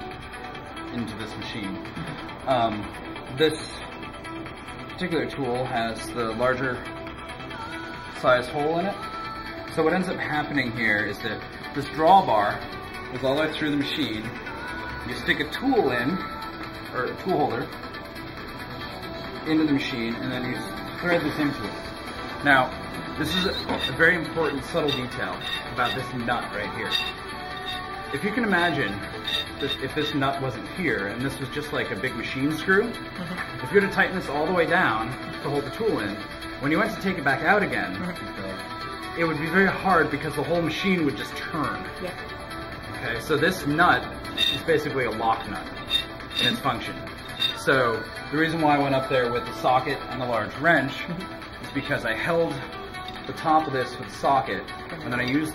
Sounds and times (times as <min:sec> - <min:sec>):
Music: 0:00.0 - 0:55.5.